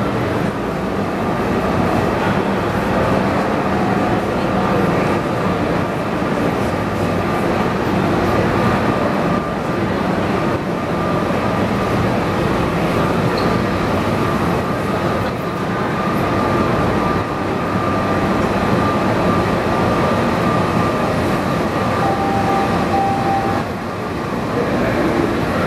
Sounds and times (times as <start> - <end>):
Subway, metro, underground: 0.0 - 25.6
Train: 0.0 - 25.6.